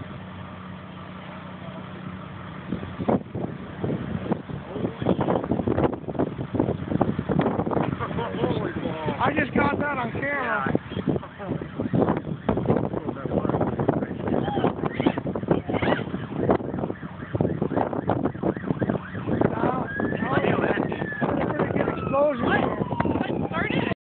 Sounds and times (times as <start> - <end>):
Speech: 19.5 - 24.0.